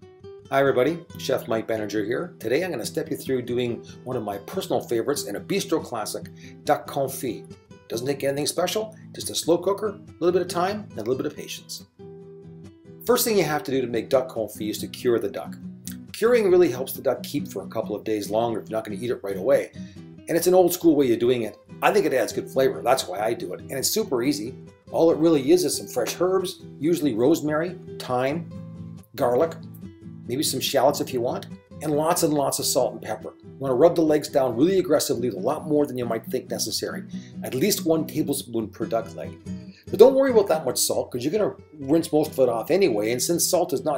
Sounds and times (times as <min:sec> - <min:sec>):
Music: 0:00.0 - 0:43.9
Speech: 0:00.5 - 0:11.9, 0:13.0 - 0:19.7, 0:20.3 - 0:28.5, 0:29.1 - 0:29.7, 0:30.3 - 0:43.9.